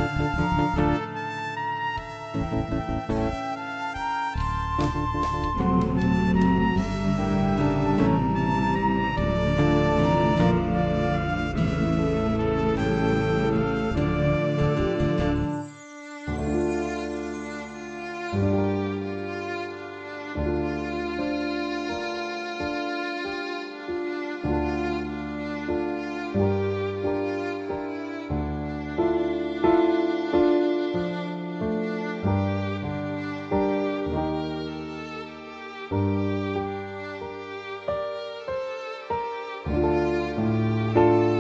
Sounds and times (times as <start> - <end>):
Sad music: 0.0 - 41.4.